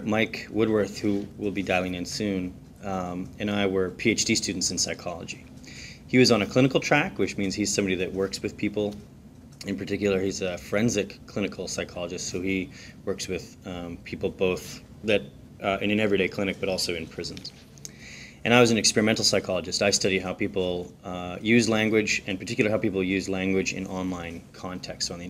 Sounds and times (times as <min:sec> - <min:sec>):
Speech: 0:00.0 - 0:05.5, 0:06.1 - 0:17.6, 0:18.4 - 0:25.3.